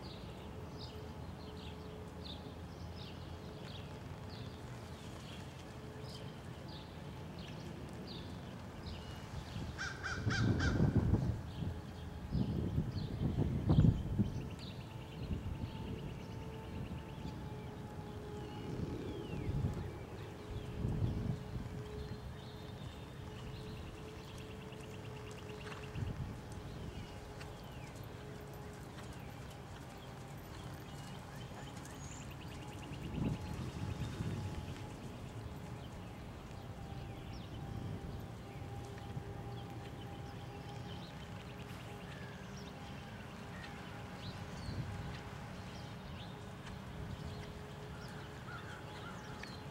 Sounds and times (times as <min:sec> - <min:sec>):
Clip-clop: 0:00.0 - 0:49.7.